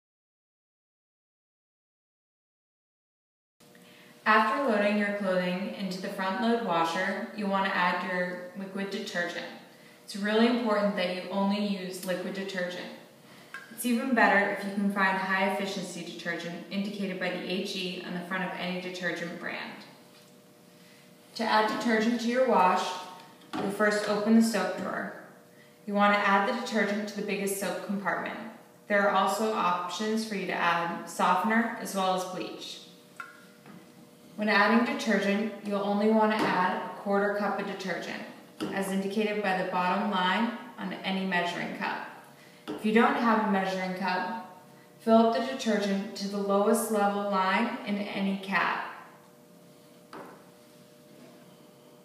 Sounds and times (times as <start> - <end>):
Speech: 4.3 - 13.0, 13.8 - 19.9, 21.4 - 25.2, 25.9 - 32.9, 34.4 - 42.1, 42.8 - 48.9.